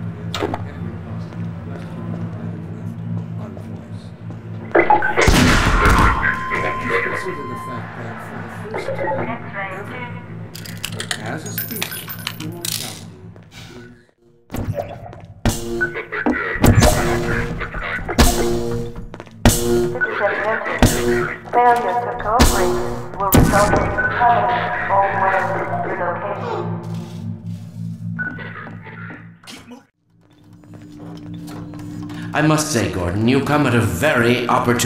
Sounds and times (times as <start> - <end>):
Speech: 0.1 - 4.2, 21.5 - 26.7, 32.3 - 34.8.